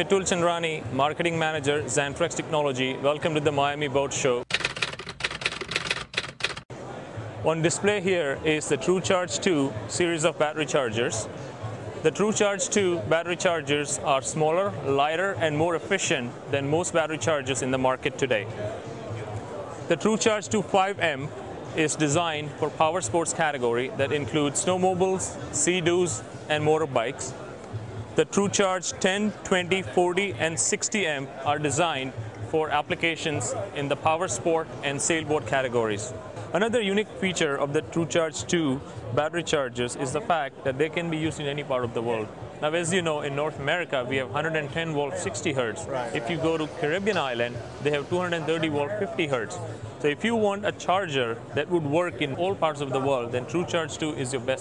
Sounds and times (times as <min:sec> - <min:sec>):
Speech: 0:00.0 - 0:04.5, 0:06.9 - 0:11.4, 0:12.0 - 0:27.4, 0:28.2 - 0:54.6.